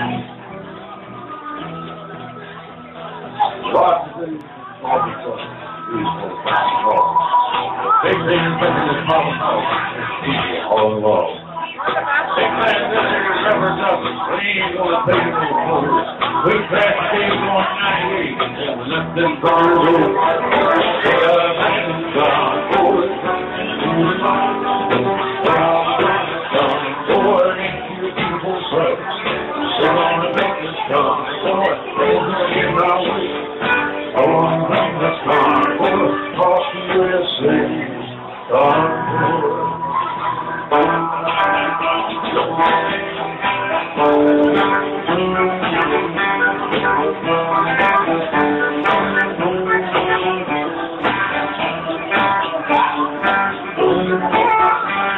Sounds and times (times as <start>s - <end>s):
Music: 0.0s - 55.1s
Speech: 0.0s - 55.1s.